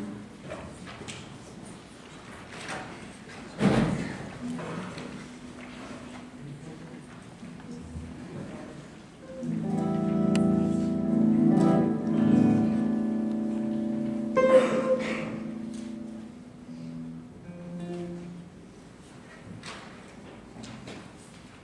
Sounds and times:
Strum: 0:09.3 - 0:18.5
Bass guitar: 0:09.4 - 0:18.3.

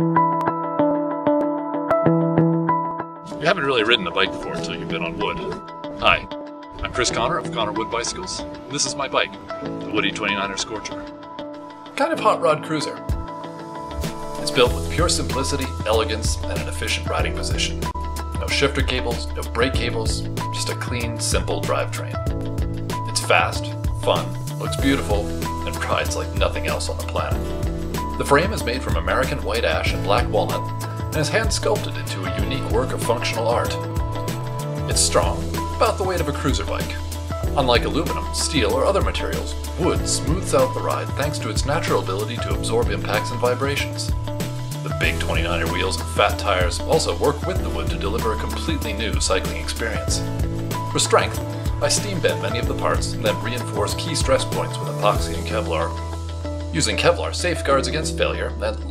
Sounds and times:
Music: 0:00.0 - 0:58.9
Speech: 0:03.3 - 0:11.1, 0:12.0 - 0:13.1, 0:14.4 - 0:22.2, 0:23.1 - 0:27.5, 0:28.2 - 0:33.9, 0:34.9 - 0:44.1, 0:44.9 - 0:50.3, 0:50.9 - 0:56.0, 0:56.7 - 0:58.9.

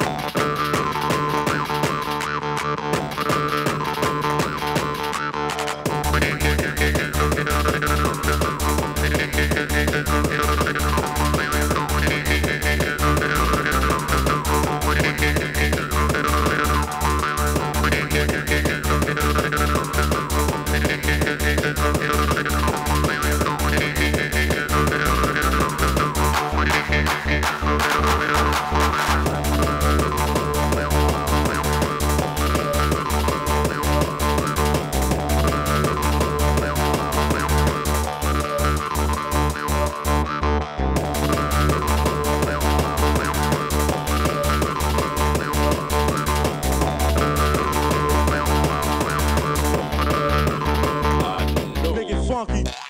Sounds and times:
Techno: 0:00.0 - 0:52.8.

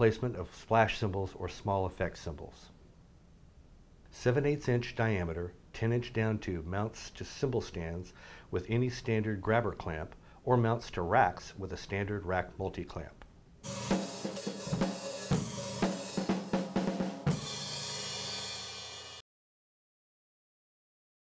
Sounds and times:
Speech: 0:00.0 - 0:02.8, 0:04.1 - 0:13.3
Music: 0:13.6 - 0:19.2.

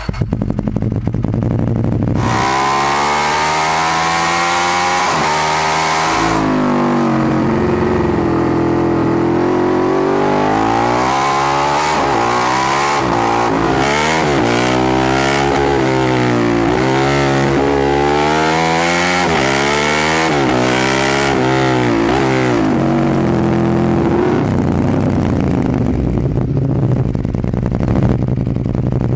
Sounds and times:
Motorcycle: 0:00.0 - 0:29.1.

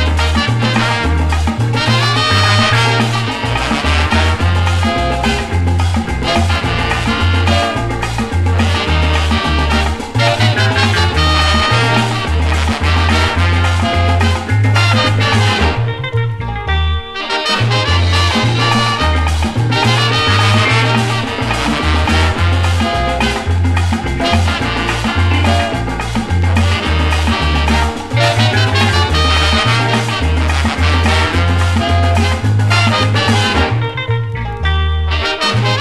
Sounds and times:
Maraca: 0:00.0 - 0:35.8
Salsa music: 0:00.0 - 0:35.8.

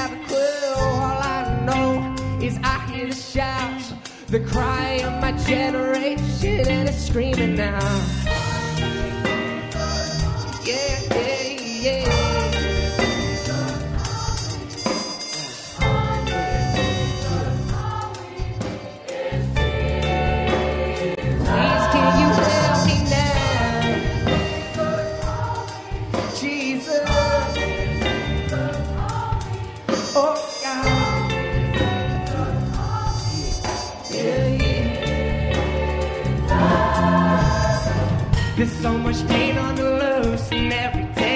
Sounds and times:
Gospel music: 0:00.0 - 0:41.3
Percussion: 0:00.0 - 0:41.3
Choir: 0:08.3 - 0:40.4.

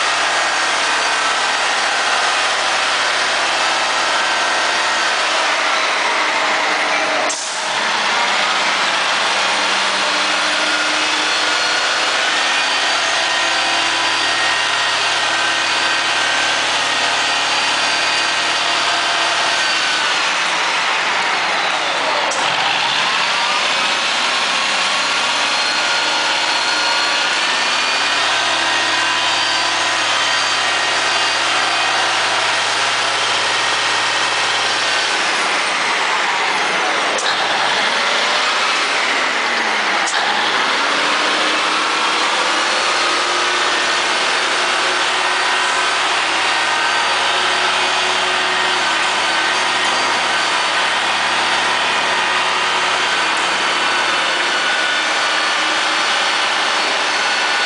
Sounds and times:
Truck: 0:00.0 - 0:57.6.

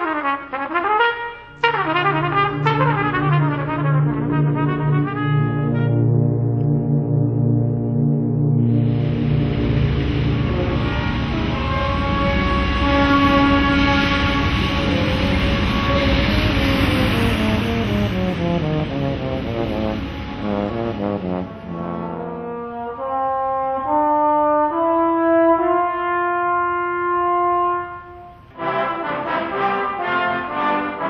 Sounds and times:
Orchestra: 0:00.0 - 0:31.1.

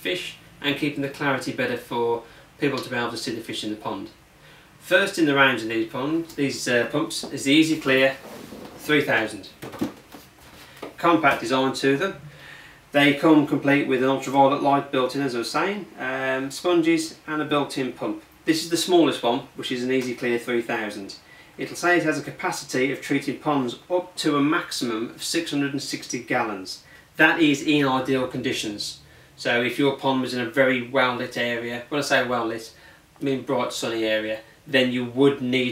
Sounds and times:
Speech: 0:00.0 - 0:04.2, 0:04.8 - 0:09.6, 0:11.0 - 0:12.2, 0:12.9 - 0:35.7.

